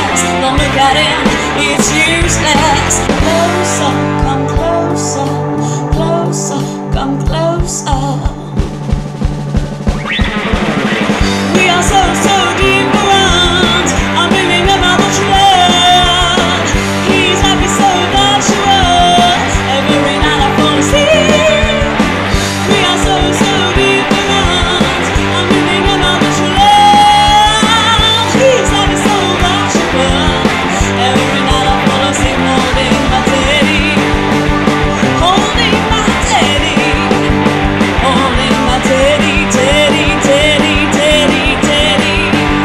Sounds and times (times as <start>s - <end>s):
Rock music: 0.0s - 42.6s.